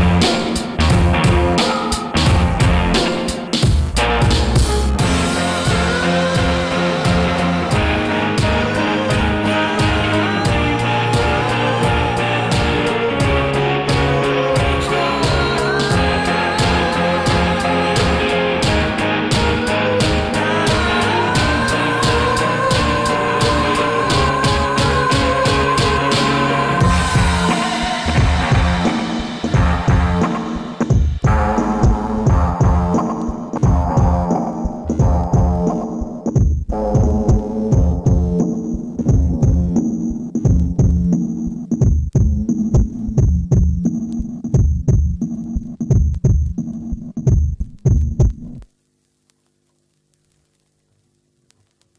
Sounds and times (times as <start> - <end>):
Music: 0.0 - 48.8.